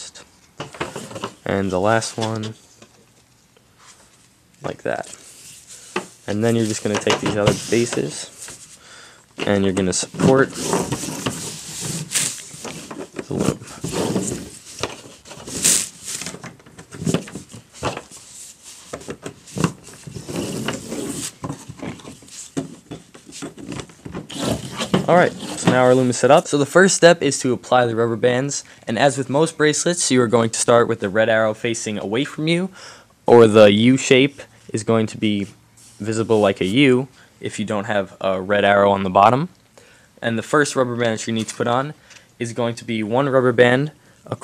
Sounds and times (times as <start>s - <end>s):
Inside, small room: 0.0s - 44.4s.